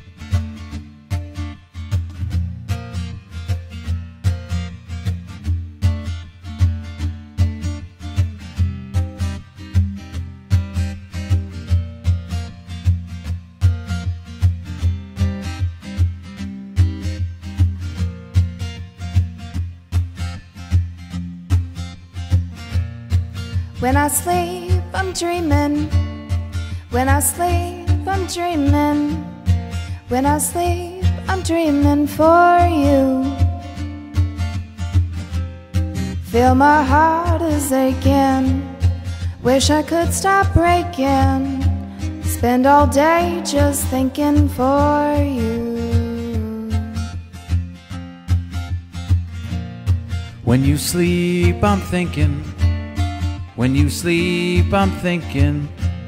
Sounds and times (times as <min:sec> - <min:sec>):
Guitar: 0:00.0 - 0:56.0.